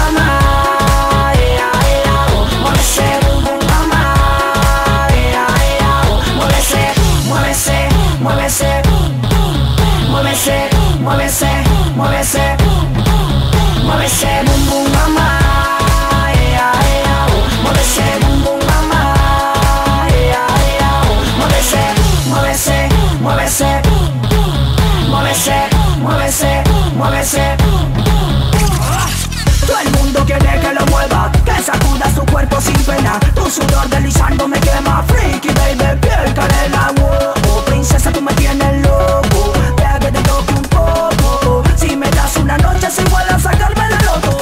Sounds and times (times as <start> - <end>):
Exciting music: 0.0 - 44.4.